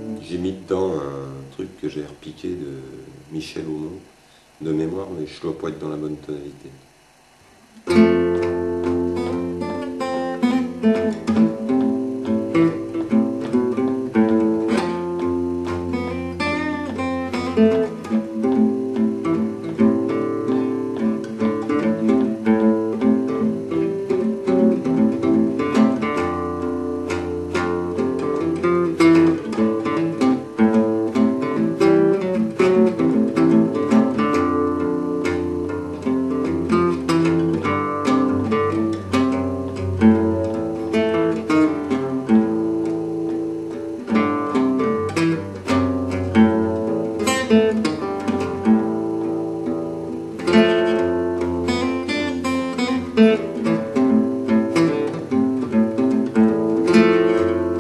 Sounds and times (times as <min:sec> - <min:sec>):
Acoustic guitar: 0:00.0 - 0:57.8.